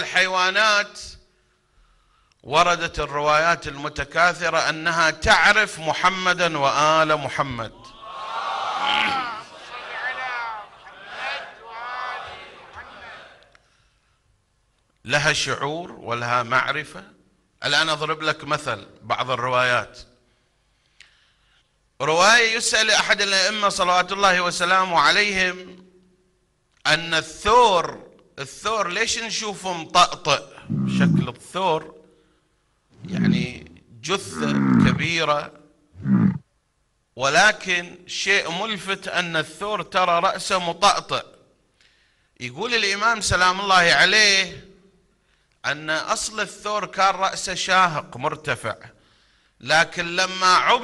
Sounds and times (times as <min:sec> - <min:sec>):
Speech: 0:00.0 - 0:01.2, 0:02.4 - 0:08.0, 0:08.8 - 0:10.8, 0:15.0 - 0:20.1, 0:22.0 - 0:25.8, 0:26.8 - 0:32.0, 0:33.0 - 0:35.6, 0:37.2 - 0:41.4, 0:42.4 - 0:44.8, 0:45.6 - 0:49.0, 0:49.6 - 0:50.8.